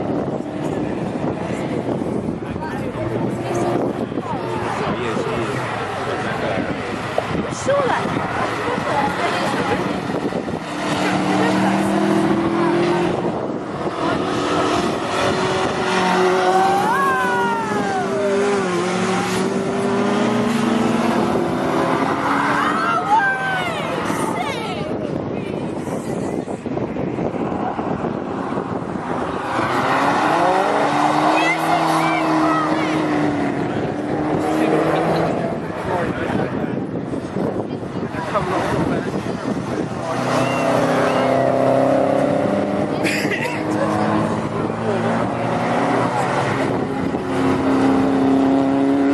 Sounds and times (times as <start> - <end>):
Race car, auto racing: 0.0 - 49.1.